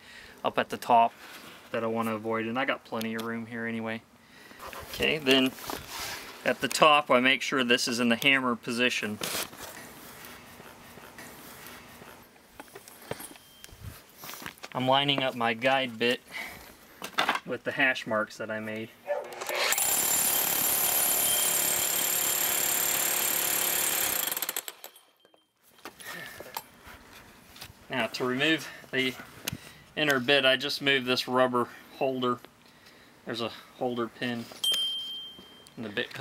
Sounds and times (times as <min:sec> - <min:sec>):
Speech: 0:00.4 - 0:01.1, 0:01.7 - 0:04.0, 0:04.9 - 0:05.6, 0:06.4 - 0:09.2, 0:14.8 - 0:16.2, 0:17.5 - 0:19.0, 0:27.9 - 0:29.2, 0:30.0 - 0:32.4, 0:33.3 - 0:34.5, 0:35.8 - 0:36.2
Drill: 0:19.4 - 0:24.8.